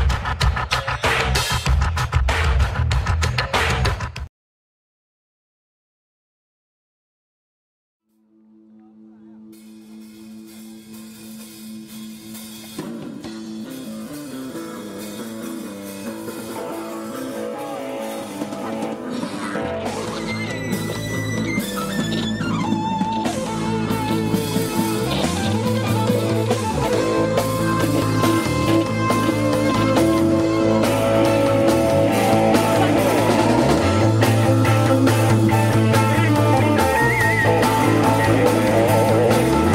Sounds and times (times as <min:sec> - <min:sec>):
Funk: 0:00.0 - 0:04.3, 0:09.4 - 0:39.7.